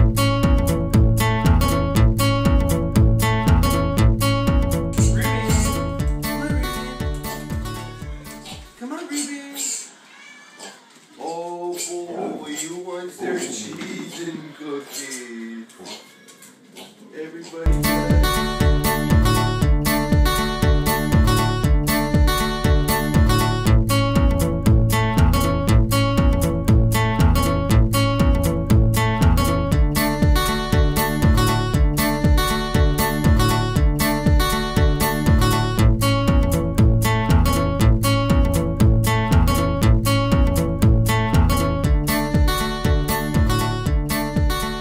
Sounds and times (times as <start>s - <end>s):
Music: 0.0s - 8.8s, 17.7s - 44.8s.